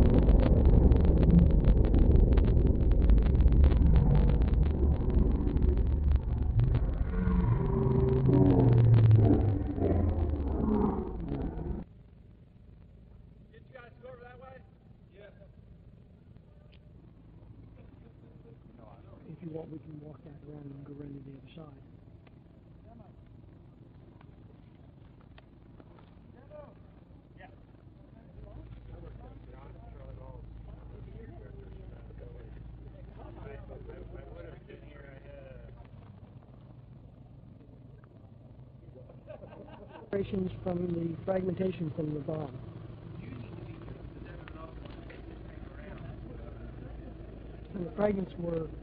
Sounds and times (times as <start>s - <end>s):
Speech: 13.5s - 15.6s, 17.8s - 21.9s, 26.3s - 26.8s, 27.4s - 35.9s, 40.1s - 42.6s, 43.2s - 48.8s.